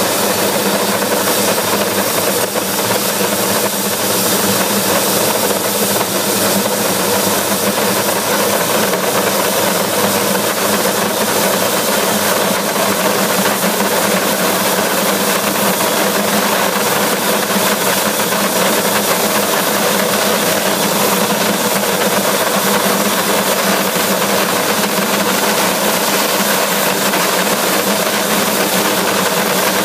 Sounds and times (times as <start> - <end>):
Engine: 0.0 - 29.8.